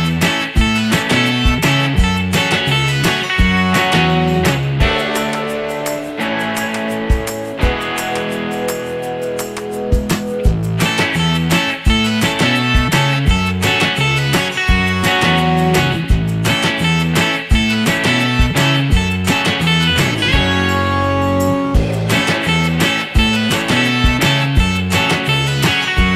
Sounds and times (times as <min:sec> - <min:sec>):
Music: 0:00.0 - 0:26.1.